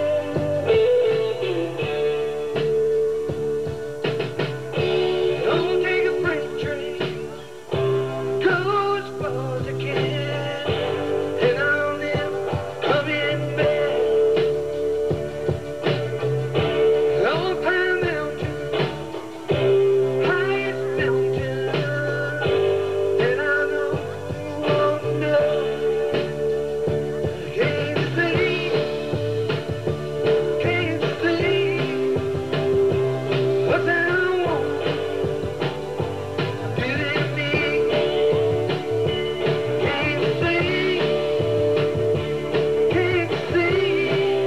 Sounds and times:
Music: 0:00.0 - 0:44.4.

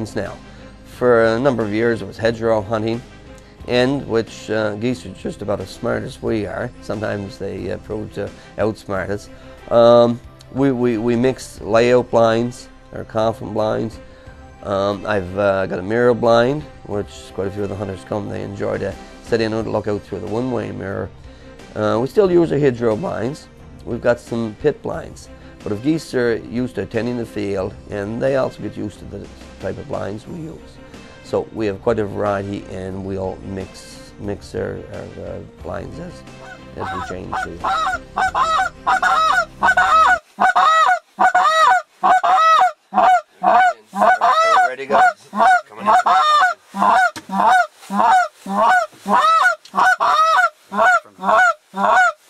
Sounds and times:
Honk: 0:36.4 - 0:52.2.

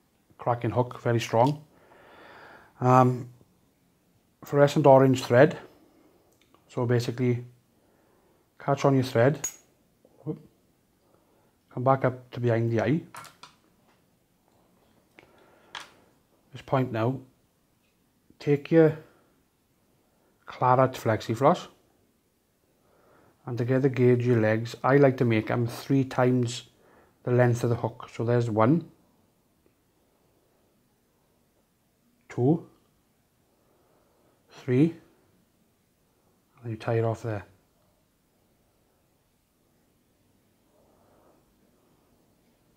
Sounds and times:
Speech: 0:00.4 - 0:01.7, 0:02.8 - 0:03.3, 0:04.4 - 0:05.7, 0:06.7 - 0:07.5, 0:08.6 - 0:09.4, 0:10.2 - 0:10.5, 0:11.7 - 0:13.1, 0:16.5 - 0:17.3, 0:18.4 - 0:19.1, 0:20.5 - 0:21.8, 0:23.4 - 0:29.0, 0:32.3 - 0:32.8, 0:34.5 - 0:35.1, 0:36.6 - 0:37.6.

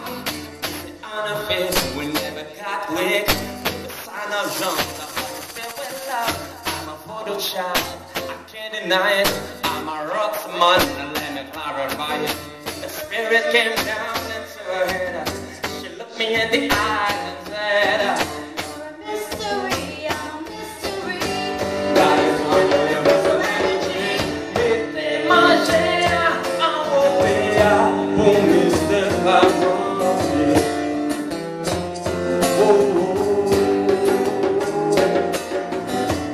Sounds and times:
Guitar: 0:00.0 - 0:36.3
Male singing: 0:00.8 - 0:31.0, 0:32.3 - 0:35.5.

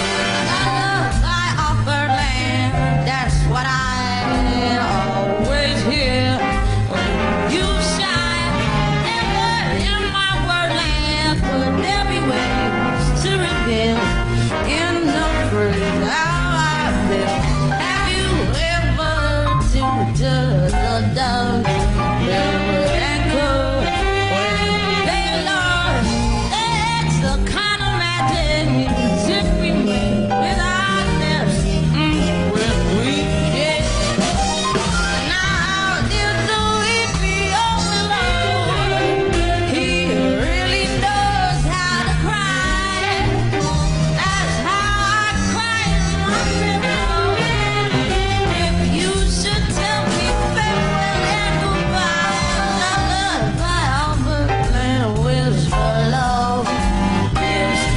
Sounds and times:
Music: 0:00.0 - 0:57.9.

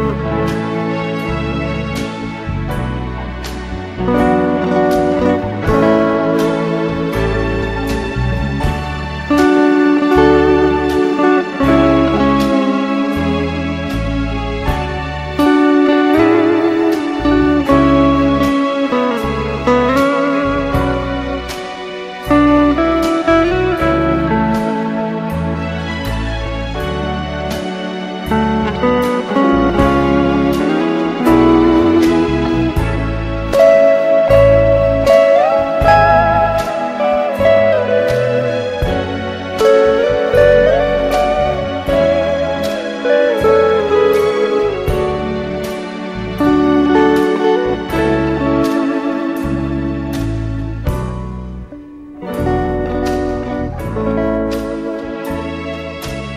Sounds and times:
Guitar: 0:00.0 - 0:56.3.

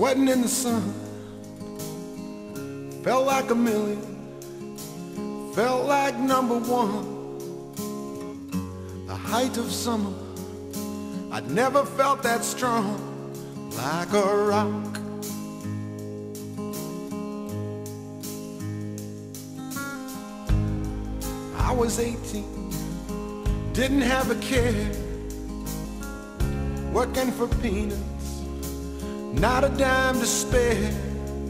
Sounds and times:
Music: 0:00.0 - 0:31.5.

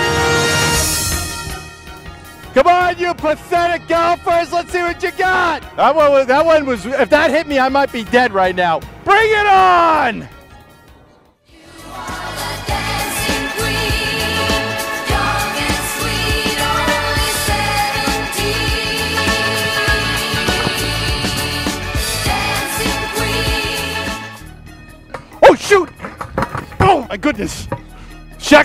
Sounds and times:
Music: 0:00.0 - 0:28.6
Speech: 0:02.6 - 0:10.3, 0:26.8 - 0:27.7, 0:28.4 - 0:28.6.

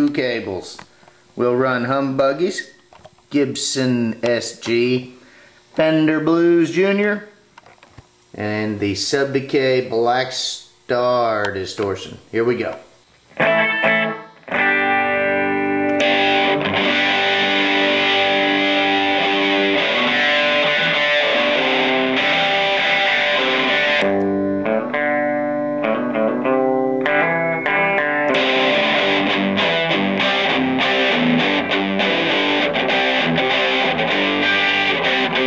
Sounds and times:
Speech: 0:00.0 - 0:05.2, 0:05.8 - 0:07.4, 0:08.3 - 0:12.9.

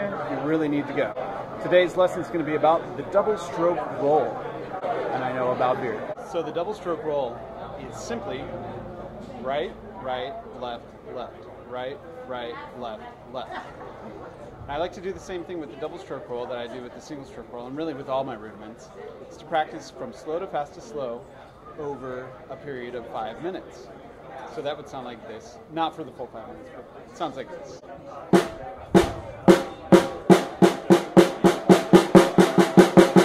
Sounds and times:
Speech: 0:00.0 - 0:31.9.

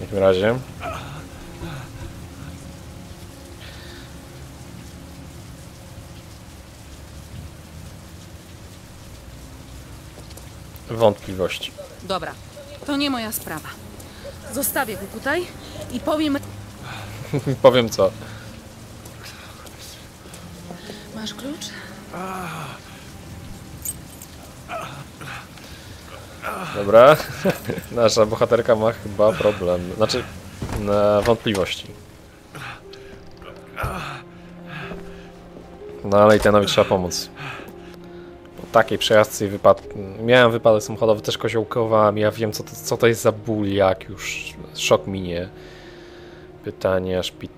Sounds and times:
Rain on surface: 0:00.0 - 0:47.5.

